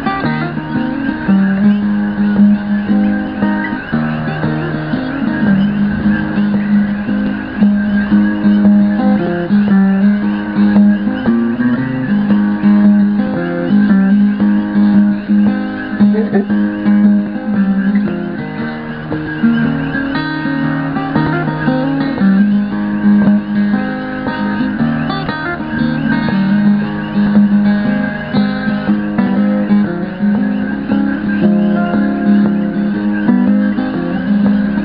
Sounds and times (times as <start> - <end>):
Acoustic guitar: 0.0 - 34.8
Strum: 0.0 - 34.8.